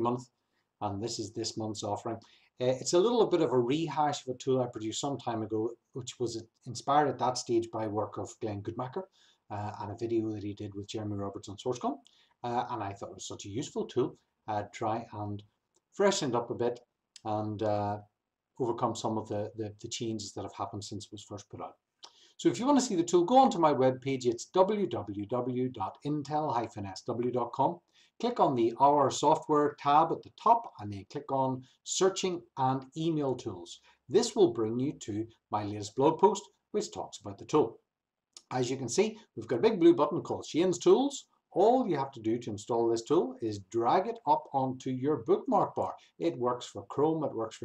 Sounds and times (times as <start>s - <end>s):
Speech: 0.0s - 15.4s, 16.0s - 18.0s, 18.6s - 21.7s, 22.4s - 37.8s, 38.4s - 47.6s.